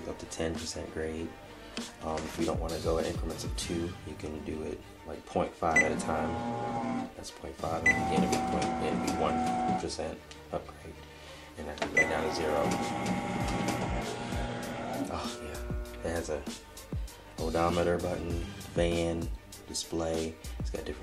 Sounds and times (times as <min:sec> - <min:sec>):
Speech: 0:00.0 - 0:01.3, 0:02.0 - 0:06.4, 0:07.2 - 0:11.0, 0:11.6 - 0:12.8, 0:15.1 - 0:16.5, 0:17.4 - 0:21.0
Music: 0:00.0 - 0:21.0.